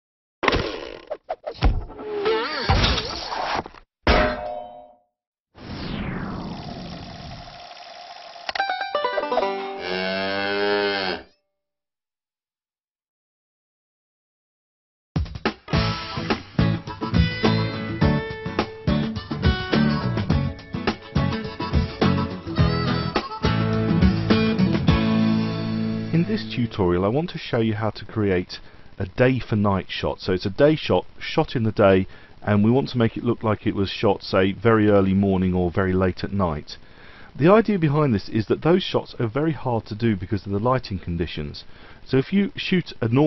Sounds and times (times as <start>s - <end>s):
Music: 8.6s - 9.9s, 15.2s - 26.8s.